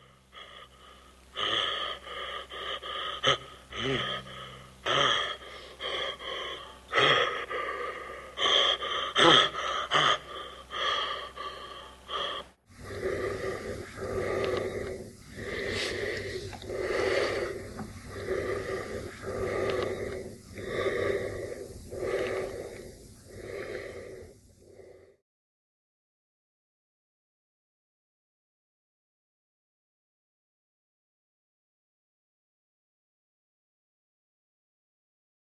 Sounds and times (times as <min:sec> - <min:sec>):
Gasp: 0:00.0 - 0:25.2
Snort: 0:00.4 - 0:25.2.